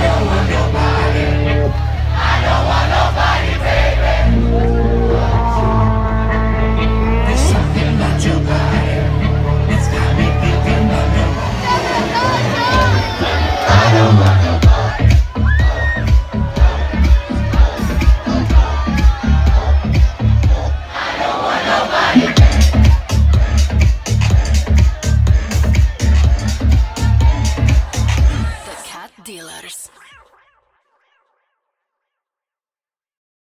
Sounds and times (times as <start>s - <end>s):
Music: 0.0s - 31.7s
Speech: 28.2s - 30.0s.